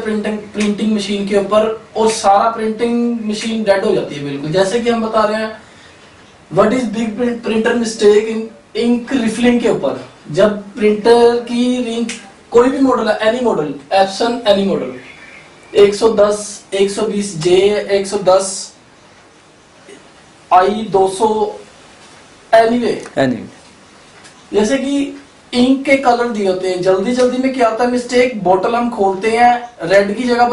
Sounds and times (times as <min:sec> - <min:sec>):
Speech: 0:00.0 - 0:05.6, 0:06.5 - 0:15.2, 0:15.8 - 0:18.8, 0:20.5 - 0:21.7, 0:22.5 - 0:23.6, 0:24.5 - 0:30.5.